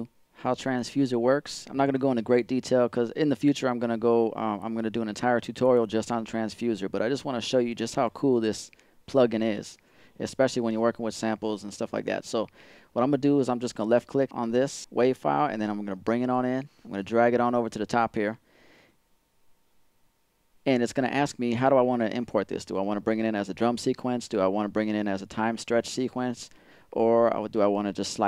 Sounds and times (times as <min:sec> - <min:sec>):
Speech: 0:00.0 - 0:18.4, 0:20.6 - 0:28.2.